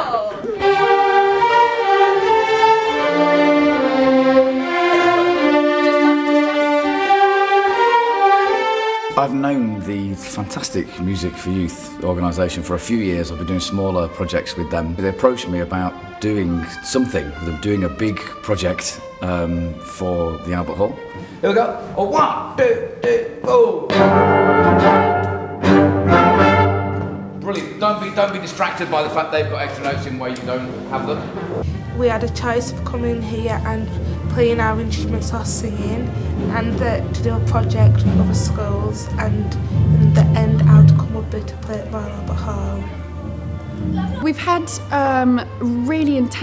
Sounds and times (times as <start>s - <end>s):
Music: 0.0s - 46.4s
Speech: 9.2s - 23.9s, 27.4s - 31.3s, 32.0s - 39.6s, 40.2s - 42.8s, 44.0s - 46.4s.